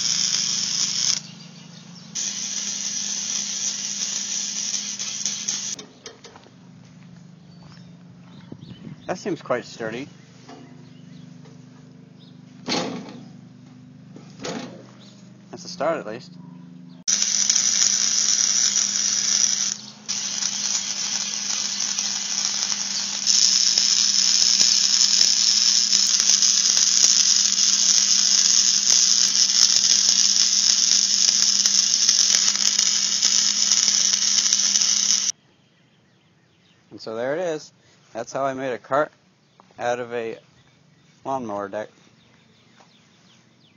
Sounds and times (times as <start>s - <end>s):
Speech: 9.1s - 10.1s, 15.5s - 16.4s, 37.0s - 39.2s, 39.8s - 40.4s, 41.2s - 42.0s.